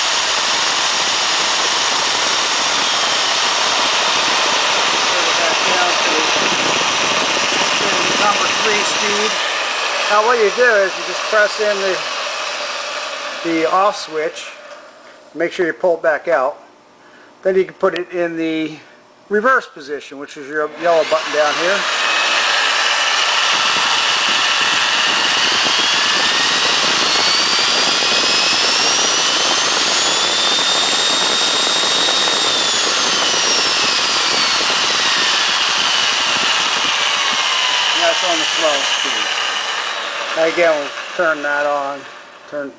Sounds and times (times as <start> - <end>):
Drill: 0.0 - 14.8, 20.7 - 42.7
Speech: 5.1 - 6.5, 7.8 - 9.4, 10.1 - 12.0, 13.4 - 14.6, 15.4 - 16.6, 17.4 - 21.9, 38.0 - 39.3, 40.4 - 42.7.